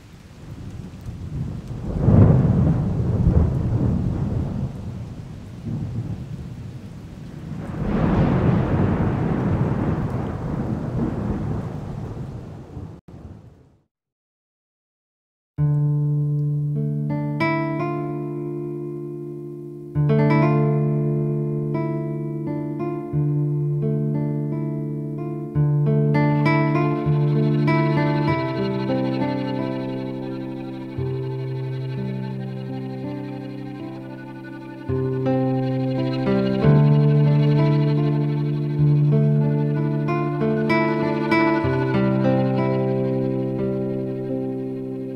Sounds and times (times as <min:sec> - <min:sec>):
Background music: 0:16.5 - 0:45.1.